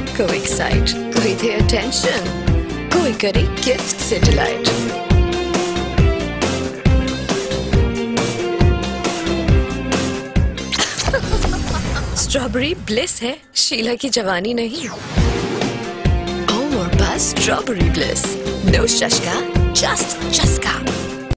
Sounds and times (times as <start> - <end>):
Speech: 0.0 - 4.7, 12.2 - 14.8, 16.5 - 20.9
Music: 0.0 - 21.3.